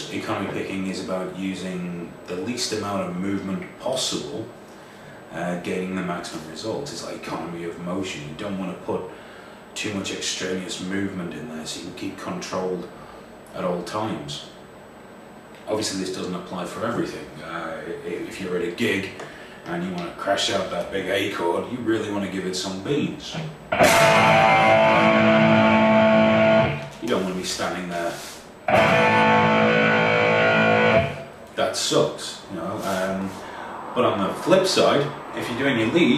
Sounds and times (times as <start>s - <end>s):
Speech: 0.0s - 4.6s, 5.3s - 9.2s, 9.8s - 14.6s, 15.6s - 23.6s, 26.9s - 28.4s, 31.5s - 36.1s
Guitar: 23.3s - 28.0s, 28.7s - 31.6s.